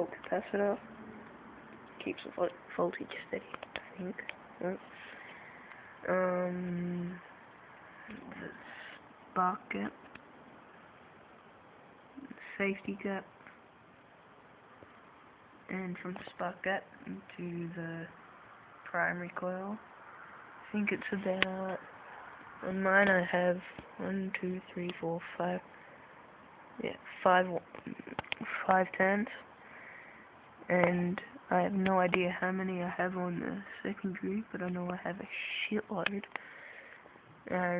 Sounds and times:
Speech: 0.0s - 0.8s, 2.0s - 5.1s, 6.0s - 7.3s, 8.1s - 10.0s, 12.2s - 13.3s, 15.7s - 18.2s, 18.9s - 19.8s, 20.7s - 21.9s, 22.6s - 25.7s, 26.8s - 29.4s, 30.7s - 36.3s, 37.5s - 37.7s.

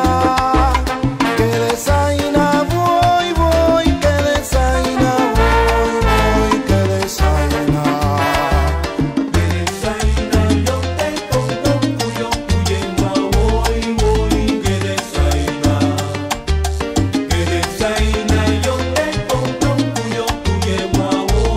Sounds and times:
Music of Africa: 0.0s - 21.5s
Salsa music: 0.0s - 21.5s.

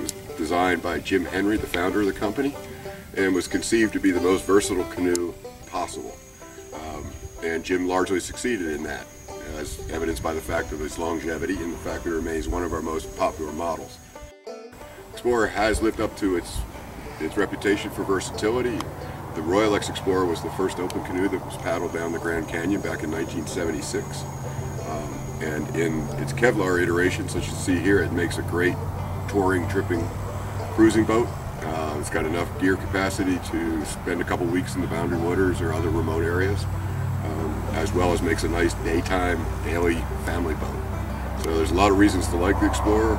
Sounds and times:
Speech: 0.0s - 2.6s, 3.2s - 6.2s, 6.8s - 14.0s, 15.2s - 30.1s, 30.8s - 40.8s, 41.4s - 43.1s
Music: 0.0s - 43.1s.

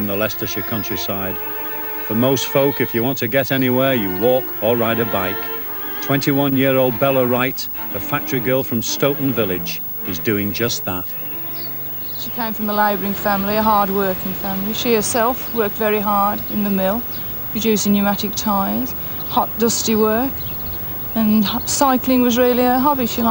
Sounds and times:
Speech: 0.0s - 1.4s, 2.1s - 5.4s, 6.0s - 11.2s, 12.2s - 20.3s, 21.2s - 23.3s
Music: 0.0s - 23.3s.

